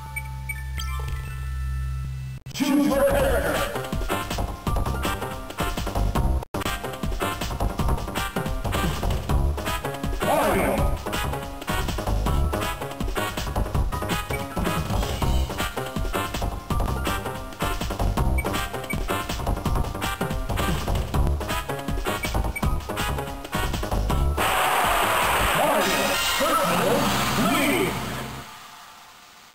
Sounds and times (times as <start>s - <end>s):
Speech: 2.6s - 3.8s, 10.2s - 11.0s, 25.6s - 28.1s.